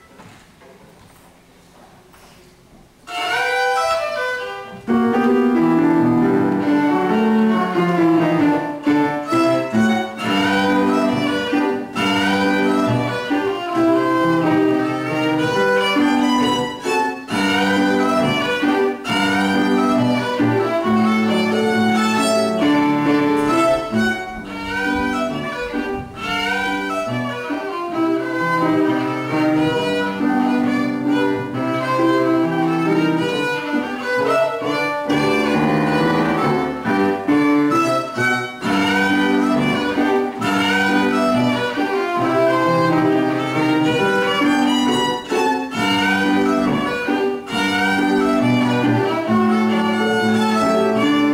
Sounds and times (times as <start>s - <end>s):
Violin, fiddle: 3.1s - 51.3s.